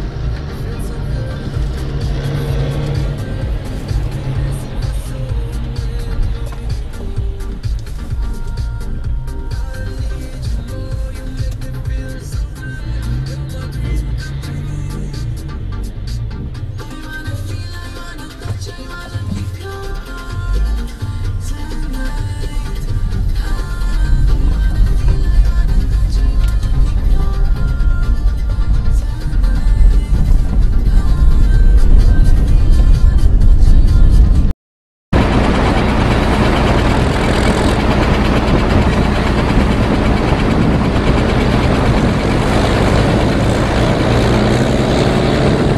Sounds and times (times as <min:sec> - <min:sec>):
Music: 0:00.0 - 0:34.5, 0:35.2 - 0:45.7
Truck: 0:00.0 - 0:34.5, 0:35.1 - 0:45.7.